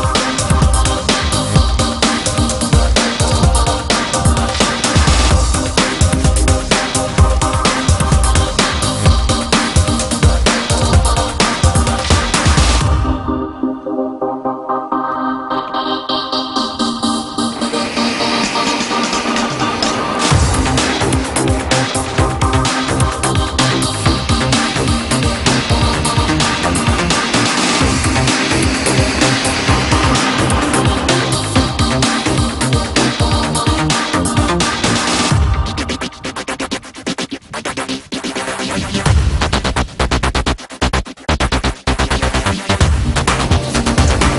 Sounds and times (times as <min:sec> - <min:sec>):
Trance music: 0:00.0 - 0:44.3.